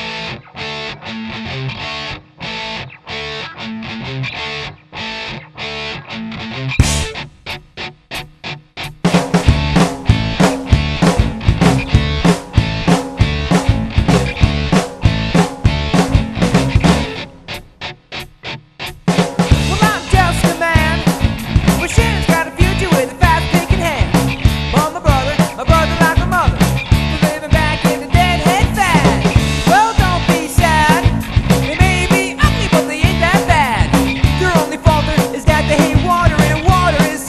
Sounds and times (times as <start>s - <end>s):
Music: 0.0s - 37.2s.